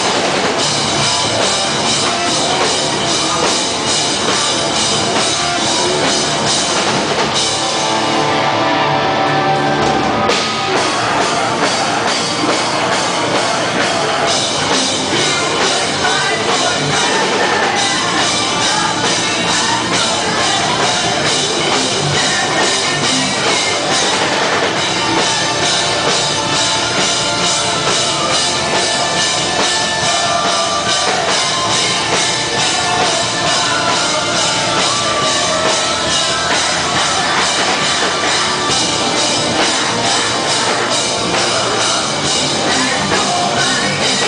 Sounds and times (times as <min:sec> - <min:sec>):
Music: 0:00.0 - 0:44.2.